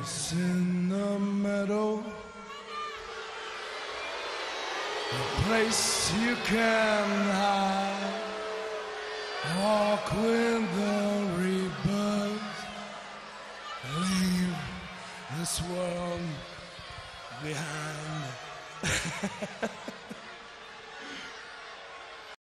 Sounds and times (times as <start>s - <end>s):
Speech: 5.2s - 8.1s, 9.5s - 12.6s, 13.8s - 16.5s, 17.4s - 18.4s.